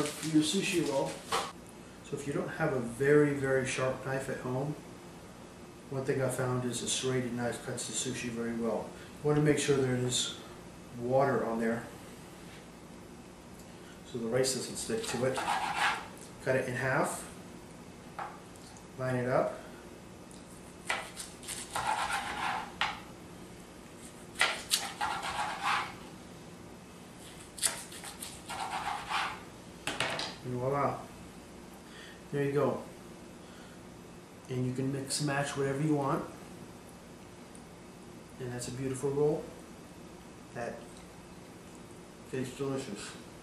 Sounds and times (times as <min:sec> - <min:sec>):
Speech: 0:00.0 - 0:01.2, 0:02.1 - 0:04.8, 0:05.9 - 0:10.4, 0:11.0 - 0:11.9, 0:14.1 - 0:15.4, 0:16.4 - 0:17.3, 0:19.0 - 0:19.6, 0:30.4 - 0:31.1, 0:32.3 - 0:32.9, 0:34.5 - 0:36.4, 0:38.4 - 0:39.6, 0:40.6 - 0:40.9, 0:42.3 - 0:43.2.